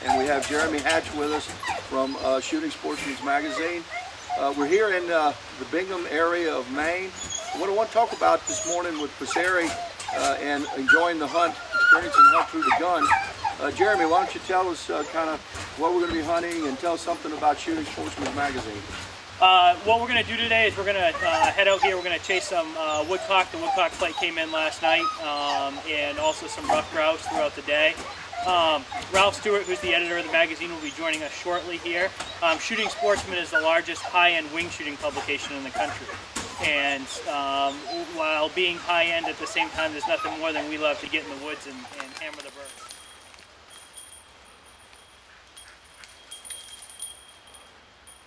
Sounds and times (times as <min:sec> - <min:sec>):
Speech: 0:00.0 - 0:03.8, 0:04.4 - 0:18.8, 0:19.4 - 0:42.8
Animal: 0:00.0 - 0:05.0, 0:20.7 - 0:43.0.